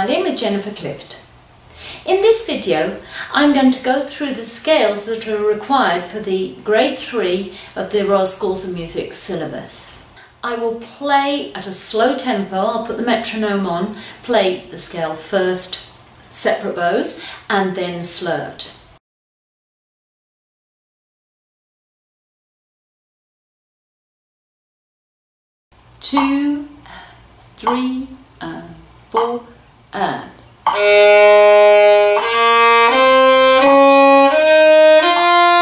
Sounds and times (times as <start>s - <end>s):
Speech: 0.0s - 1.3s, 2.0s - 18.8s, 26.0s - 27.0s, 27.6s - 30.4s.